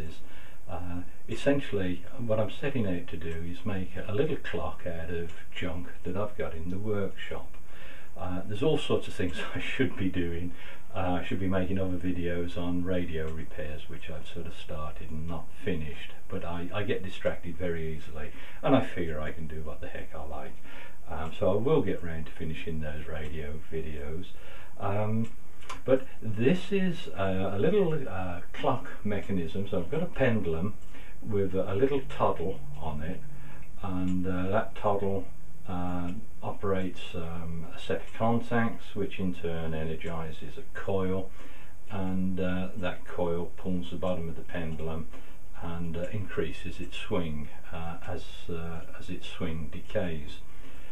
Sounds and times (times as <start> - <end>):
Speech: 0.0 - 50.9.